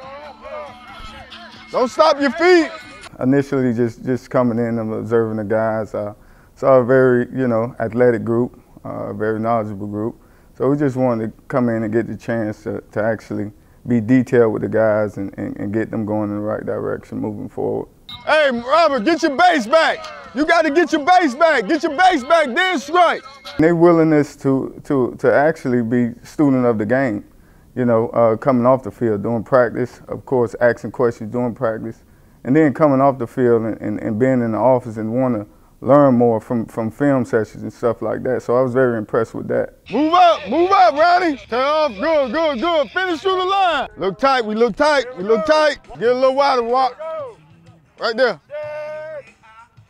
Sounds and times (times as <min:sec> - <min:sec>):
Speech: 0:00.8 - 0:47.4, 0:48.0 - 0:49.2.